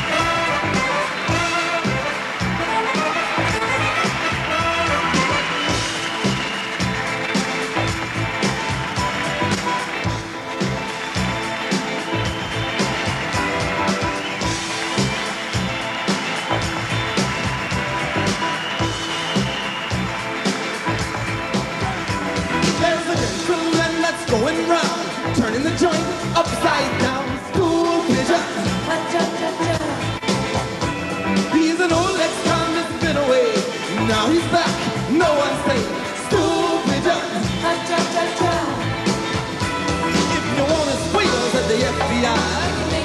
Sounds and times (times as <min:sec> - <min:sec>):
Music: 0:00.0 - 0:43.0.